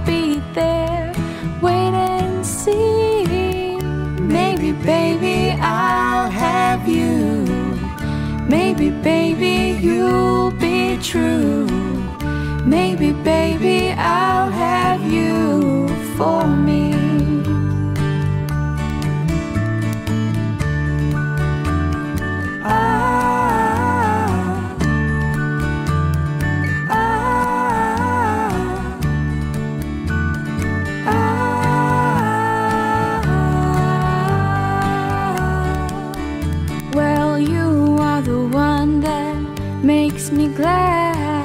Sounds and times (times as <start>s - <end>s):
Guitar: 0.0s - 41.4s.